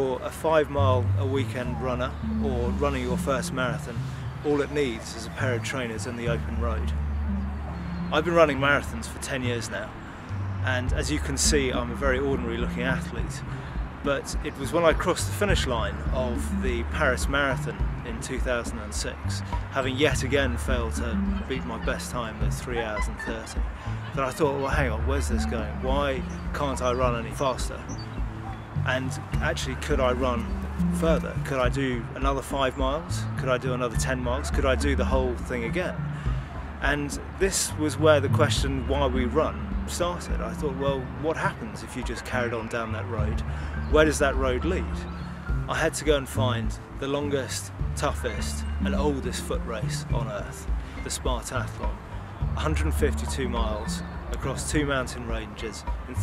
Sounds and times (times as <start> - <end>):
Speech: 0.0 - 6.9, 8.1 - 9.9, 10.6 - 13.4, 14.0 - 27.8, 28.9 - 36.0, 36.8 - 45.0, 45.7 - 52.0, 52.6 - 56.2
Music: 0.0 - 56.2
Outside, rural or natural: 0.0 - 56.2.